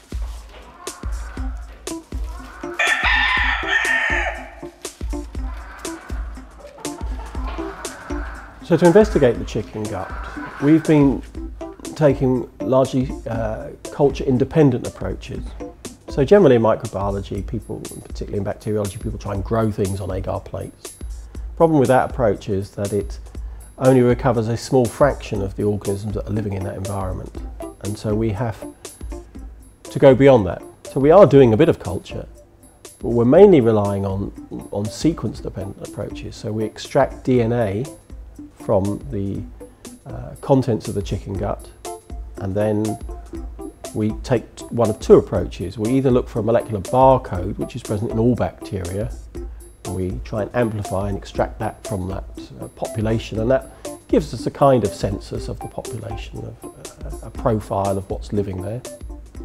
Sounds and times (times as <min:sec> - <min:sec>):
Music: 0:00.0 - 0:59.4
Speech: 0:08.6 - 0:11.3, 0:11.9 - 0:20.9, 0:21.6 - 0:23.2, 0:23.8 - 0:28.7, 0:29.9 - 0:32.3, 0:33.0 - 0:38.0, 0:38.6 - 0:39.5, 0:40.1 - 0:41.8, 0:42.4 - 0:43.0, 0:43.9 - 0:49.2, 0:49.9 - 0:58.9.